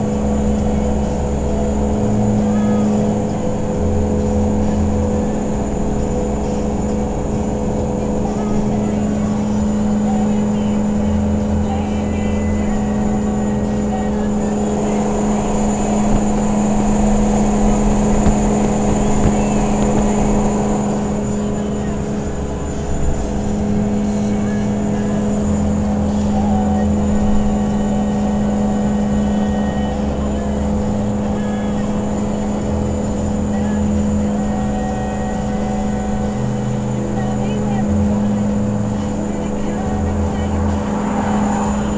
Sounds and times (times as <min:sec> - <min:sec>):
Car: 0:00.0 - 0:41.9.